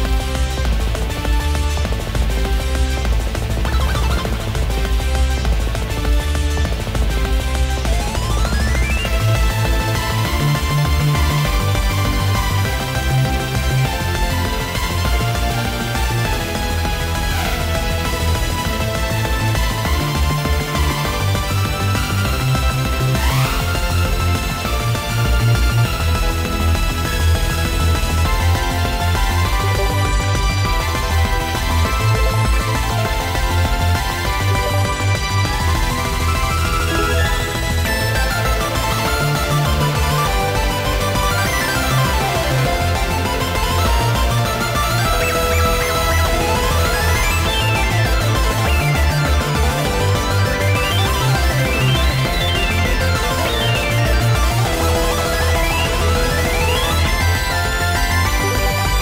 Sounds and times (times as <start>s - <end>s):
Music: 0.0s - 59.0s.